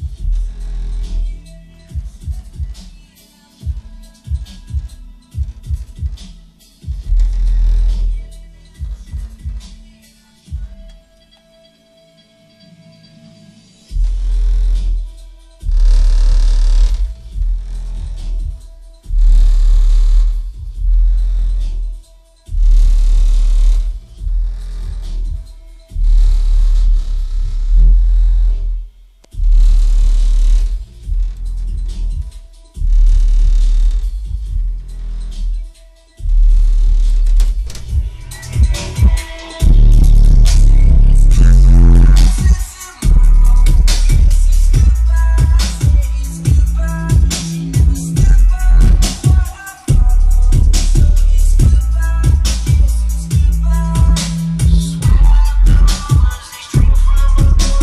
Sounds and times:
Music: 0:00.0 - 0:57.8.

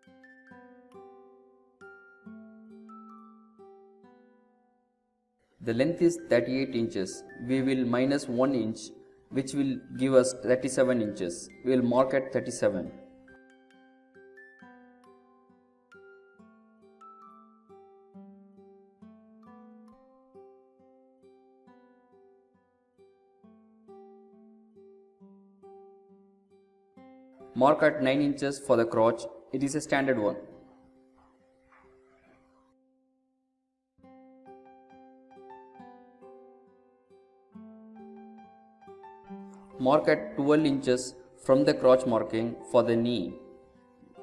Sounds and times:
Music: 0:00.0 - 0:33.4, 0:34.0 - 0:44.2
Speech: 0:05.6 - 0:12.9, 0:27.6 - 0:30.5, 0:39.8 - 0:43.4.

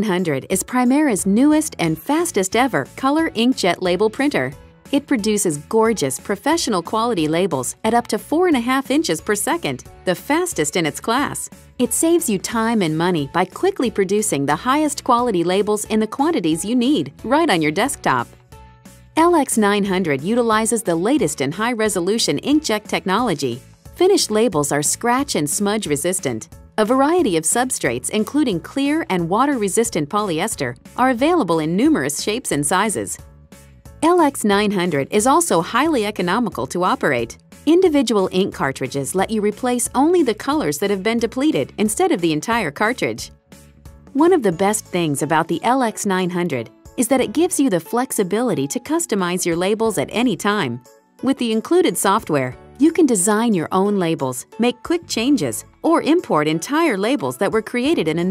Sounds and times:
Speech: 0:00.0 - 0:18.3, 0:19.2 - 0:33.2, 0:34.0 - 0:43.3, 0:44.2 - 0:58.3
Music: 0:00.0 - 0:58.3.

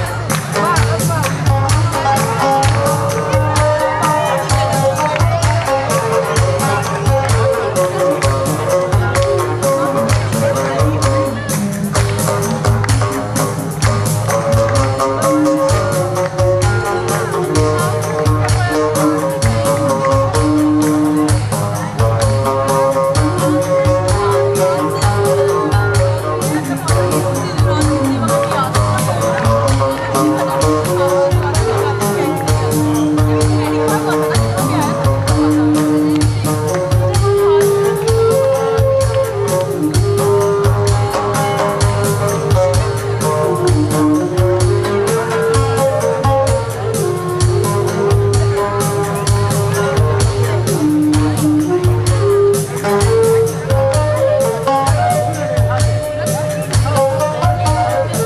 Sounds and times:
Music: 0:00.0 - 0:58.2
Speech: 0:00.0 - 0:58.2.

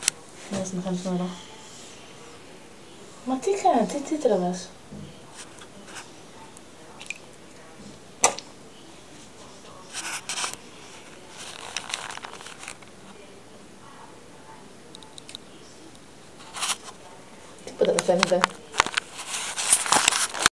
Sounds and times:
Speech: 0:00.0 - 0:19.3.

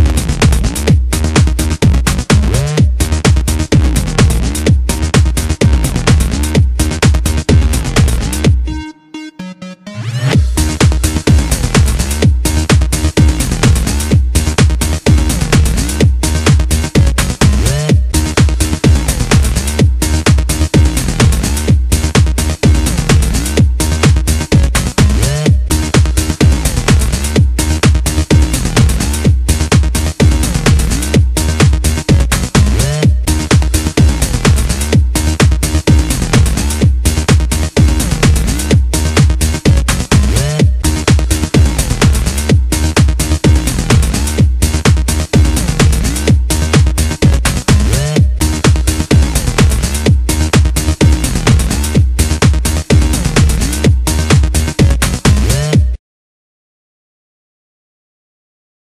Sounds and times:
Music: 0:00.0 - 0:56.0.

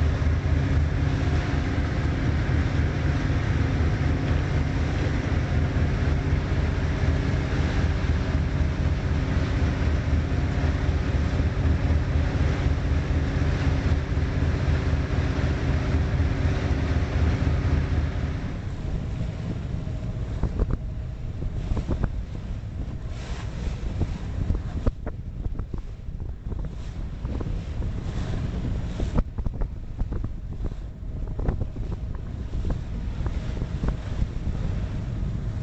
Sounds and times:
Boat, Water vehicle: 0:00.0 - 0:35.6.

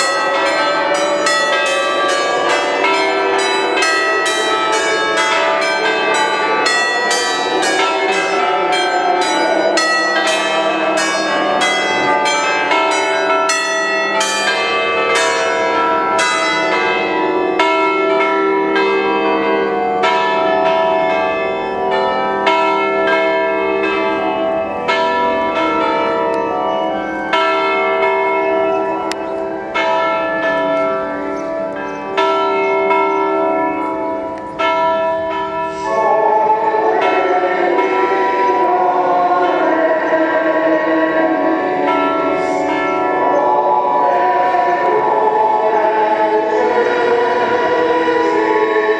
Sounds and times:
Church bell: 0:00.0 - 0:48.9.

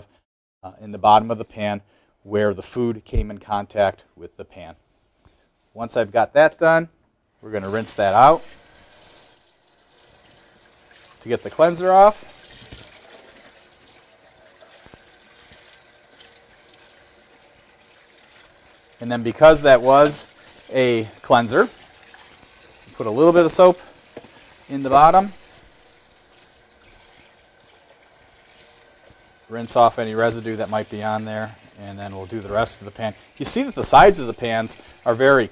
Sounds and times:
Sink (filling or washing): 0:07.4 - 0:35.5
Water tap, faucet: 0:07.4 - 0:35.5
Water: 0:07.6 - 0:35.5.

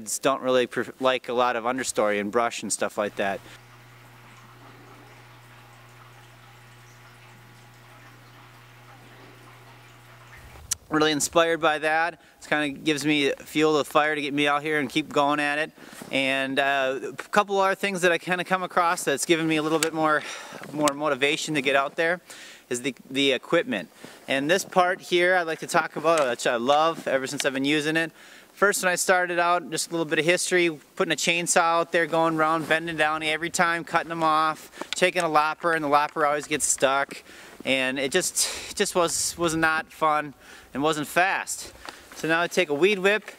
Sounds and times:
Speech: 0:00.0 - 0:03.4, 0:10.9 - 0:43.3.

